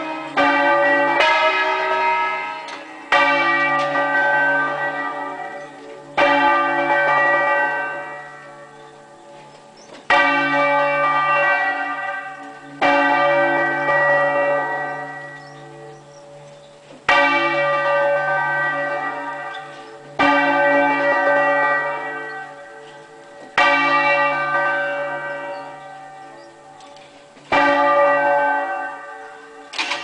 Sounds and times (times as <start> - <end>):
Bell: 0.0 - 30.0.